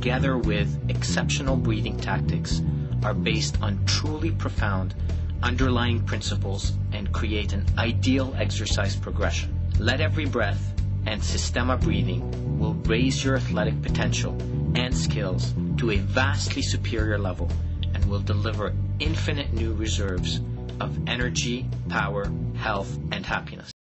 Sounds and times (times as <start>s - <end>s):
Music: 0.0s - 23.8s
Speech: 0.0s - 23.8s.